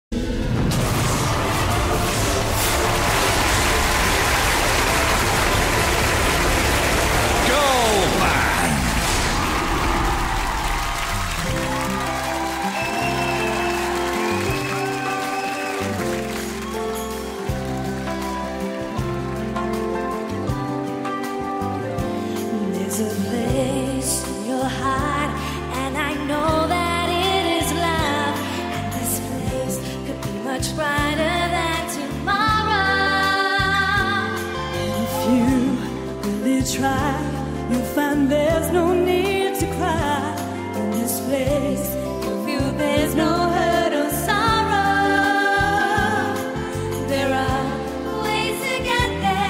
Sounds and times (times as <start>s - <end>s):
Music: 0.0s - 49.4s
Rain on surface: 1.7s - 12.2s
Speech: 7.4s - 8.8s.